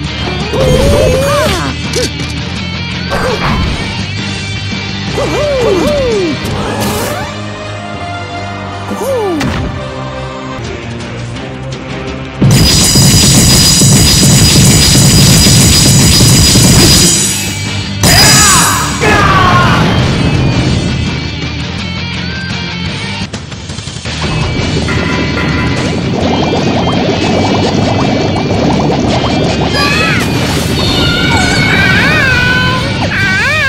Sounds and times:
Smash, crash: 12.4 - 19.0, 24.2 - 32.2.

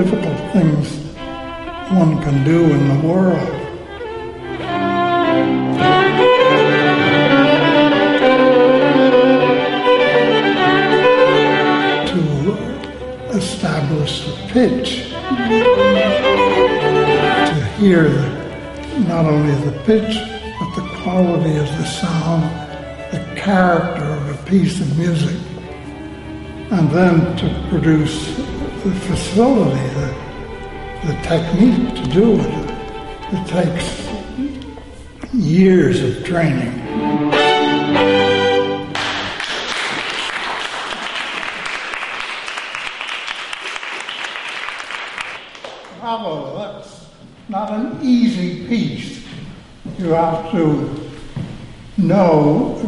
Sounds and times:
Speech: 0.0 - 1.1, 1.9 - 3.7, 12.0 - 15.2, 17.4 - 25.5, 26.7 - 30.2, 31.0 - 34.6, 35.3 - 36.8, 46.0 - 51.1, 52.0 - 52.8
Violin, fiddle: 0.0 - 39.0.

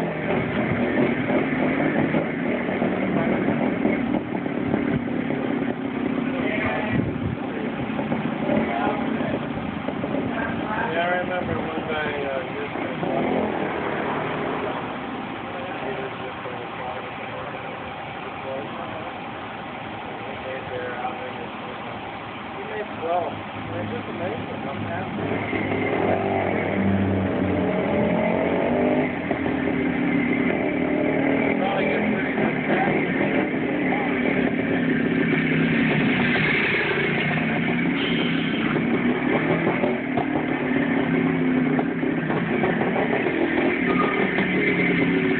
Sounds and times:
Speech: 6.3 - 7.8, 8.4 - 9.5, 10.2 - 13.4, 15.4 - 19.3, 20.0 - 25.3, 31.5 - 34.4.

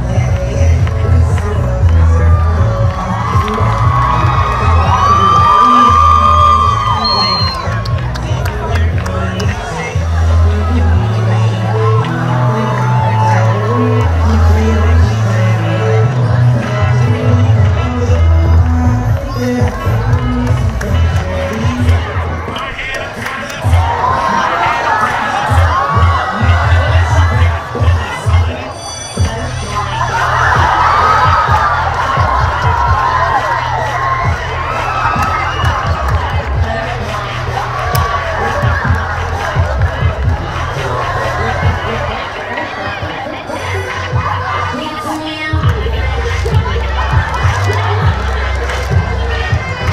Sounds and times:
Cheering: 0.0 - 49.9
Crowd: 0.0 - 49.9.

